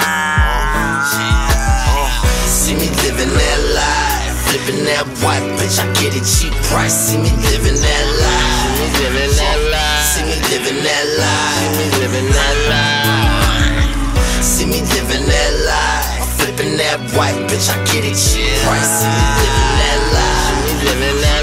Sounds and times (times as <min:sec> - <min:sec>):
Background music: 0:00.0 - 0:21.4
Soundtrack music: 0:00.0 - 0:21.4.